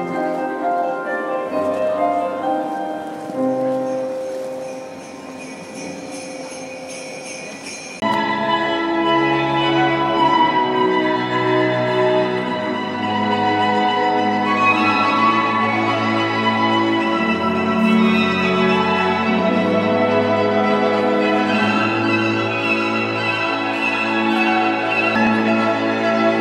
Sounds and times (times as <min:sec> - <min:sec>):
Music: 0:00.0 - 0:26.4.